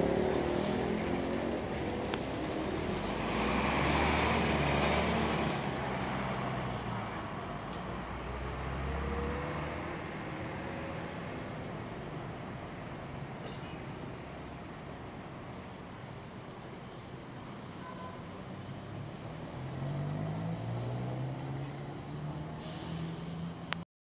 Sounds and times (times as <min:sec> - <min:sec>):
Bus: 0:00.0 - 0:23.9.